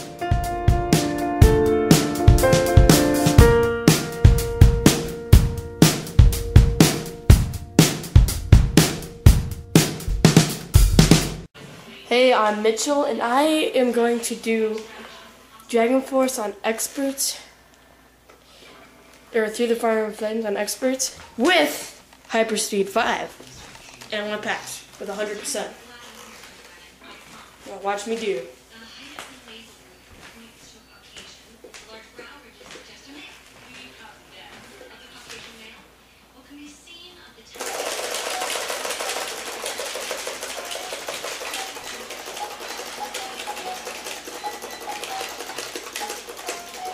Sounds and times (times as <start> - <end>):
Speech: 11.9 - 17.5, 19.3 - 37.6.